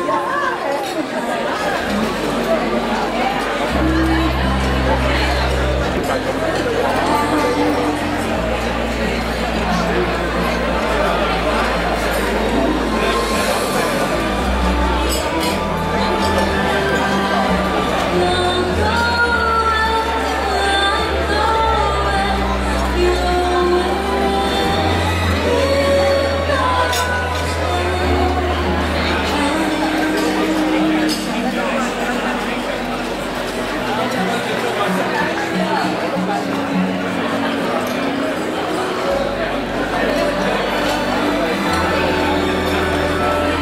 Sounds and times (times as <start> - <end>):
Music: 1.5 - 43.6
Female singing: 3.7 - 8.5, 14.9 - 31.9.